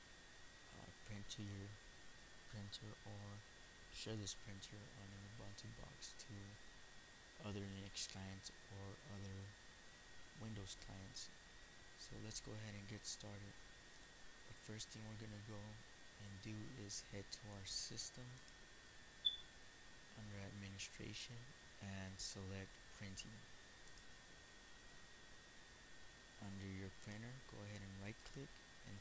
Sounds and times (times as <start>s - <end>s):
Speech: 0.7s - 1.8s, 2.5s - 3.4s, 4.0s - 6.6s, 7.4s - 9.6s, 10.4s - 11.4s, 12.0s - 13.6s, 14.5s - 18.5s, 20.1s - 23.5s, 26.4s - 29.0s.